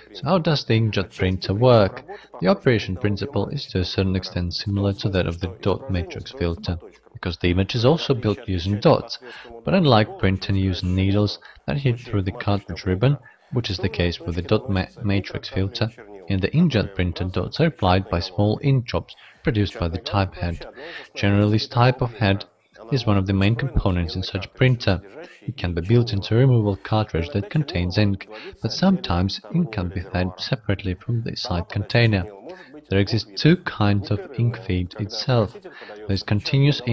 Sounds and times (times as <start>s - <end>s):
Speech: 0.0s - 36.9s.